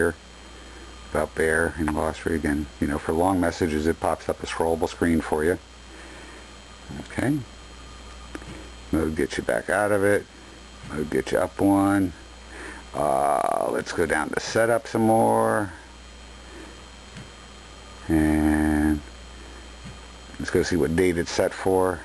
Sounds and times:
Speech: 0.0 - 0.2, 1.1 - 5.6, 6.9 - 7.5, 8.9 - 10.3, 10.9 - 12.2, 13.0 - 15.8, 18.0 - 19.1, 20.3 - 22.0.

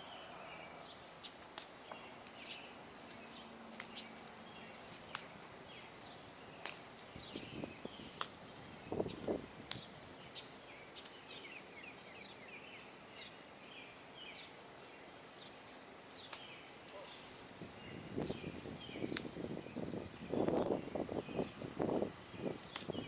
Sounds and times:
Bird: 0.0 - 21.7.

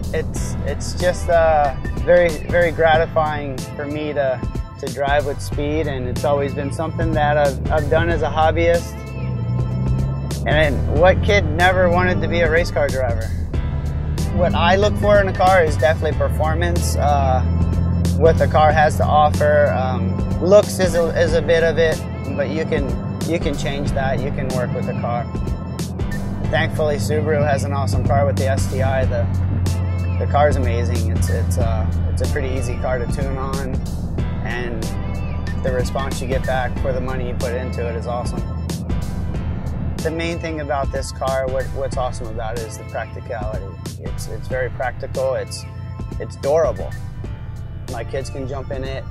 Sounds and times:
Car: 0.0 - 49.1
Music: 0.0 - 49.1
Speech: 0.1 - 9.0, 10.5 - 13.4, 14.3 - 17.5, 18.2 - 25.3, 26.5 - 29.3, 30.2 - 33.8, 34.4 - 35.0, 35.6 - 38.4, 40.0 - 47.0, 47.9 - 49.1.

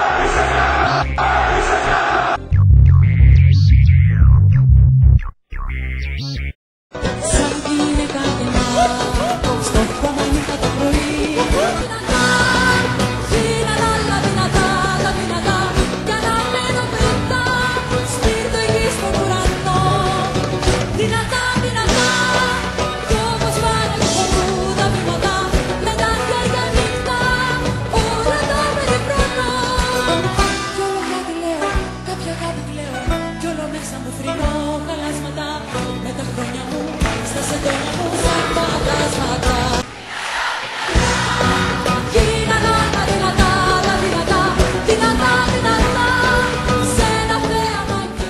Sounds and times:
Singing: 7.0 - 48.2.

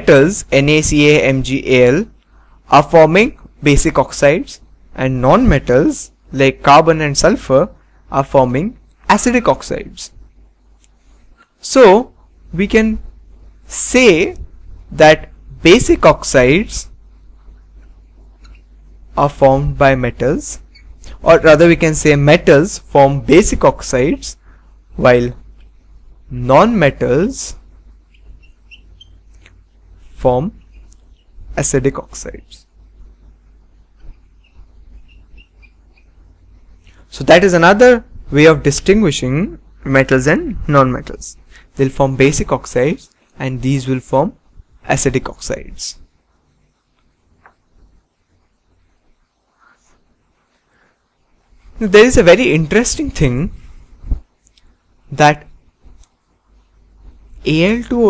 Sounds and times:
Speech: 0.0 - 10.2, 11.6 - 13.1, 13.7 - 17.0, 19.2 - 24.4, 25.0 - 25.4, 26.3 - 27.6, 30.2 - 30.6, 31.6 - 32.7, 37.1 - 46.1, 51.8 - 53.6, 55.1 - 55.5, 57.4 - 58.1
Inside, small room: 0.0 - 58.1.

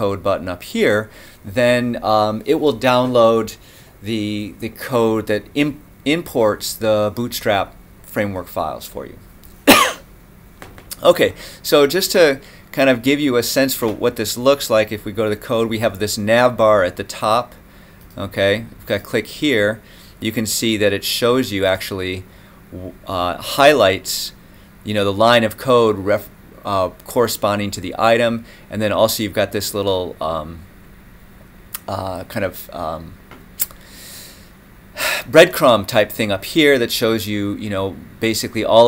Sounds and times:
Speech: 0.0 - 9.2, 11.0 - 17.6, 18.2 - 30.7, 31.8 - 33.2, 35.3 - 38.8
Inside, small room: 0.0 - 38.8.

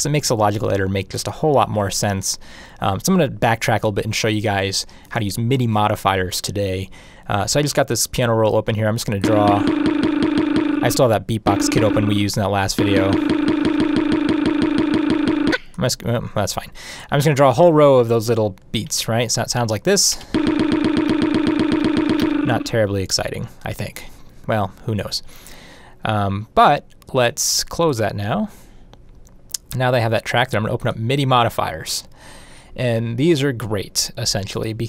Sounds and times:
Speech: 0.0 - 9.7, 10.8 - 13.2, 15.8 - 20.2, 22.5 - 25.3, 26.0 - 28.5, 29.6 - 32.1, 32.8 - 34.8.

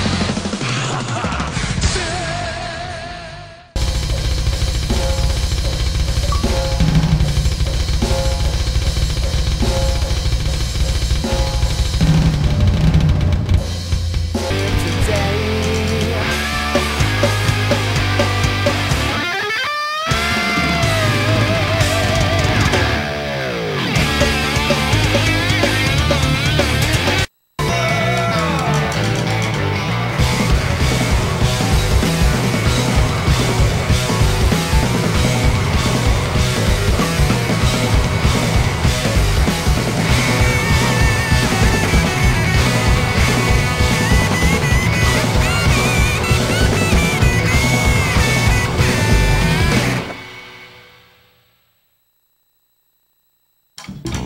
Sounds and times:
Rock music: 0.0 - 51.3.

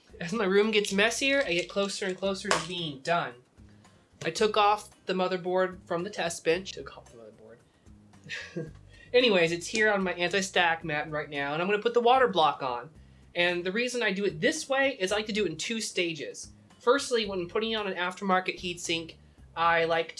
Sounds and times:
Speech: 0.1 - 3.4, 4.2 - 7.6, 9.2 - 20.1.

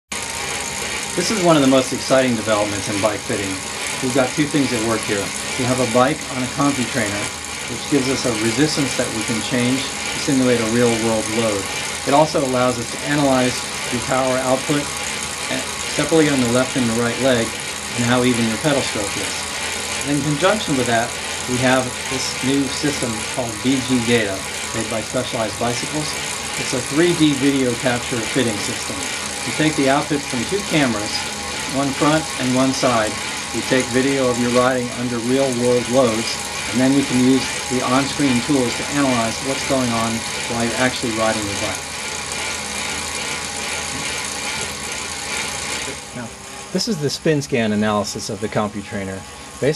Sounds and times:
Bicycle: 0.1 - 49.7
Speech: 1.2 - 14.9, 15.5 - 19.4, 20.0 - 41.8, 46.1 - 49.7.

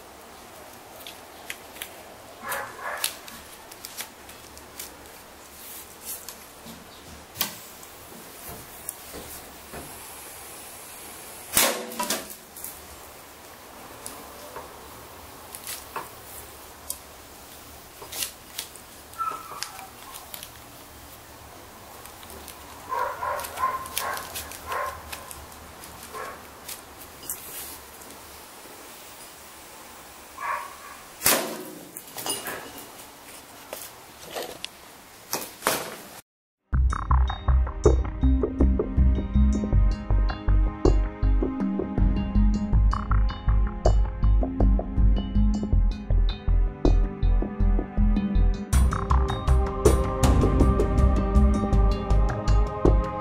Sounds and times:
Outside, rural or natural: 0.0 - 53.2.

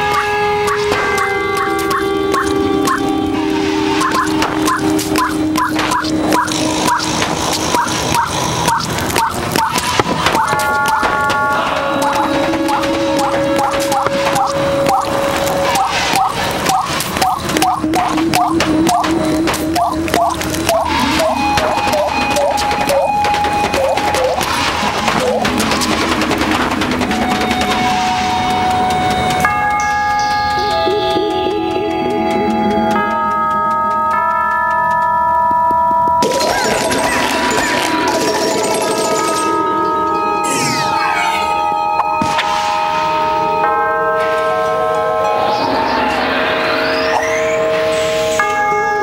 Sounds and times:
Music: 0.0 - 49.0
Outside, urban or manmade: 0.0 - 49.0.

